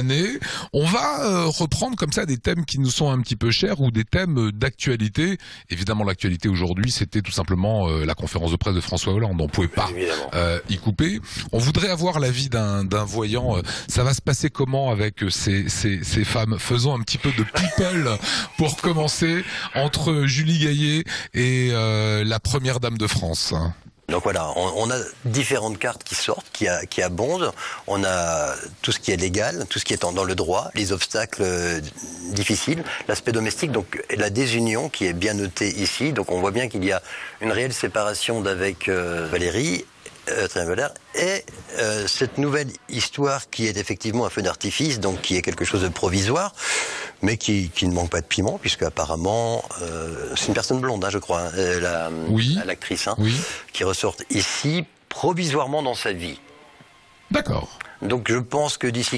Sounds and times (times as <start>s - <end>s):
Speech: 0.0s - 46.6s, 47.2s - 56.5s, 57.3s - 59.1s.